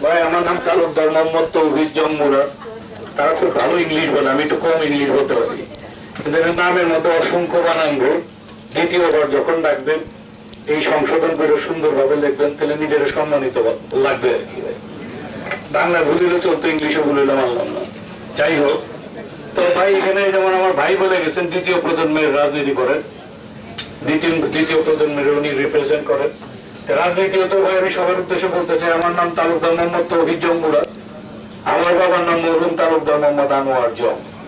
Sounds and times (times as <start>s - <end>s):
Male speech, man speaking: 0.0s - 2.6s, 3.2s - 10.1s, 10.7s - 14.8s, 15.7s - 18.9s, 19.6s - 23.1s, 24.0s - 31.0s, 31.6s - 34.2s
Narration, monologue: 0.0s - 34.4s.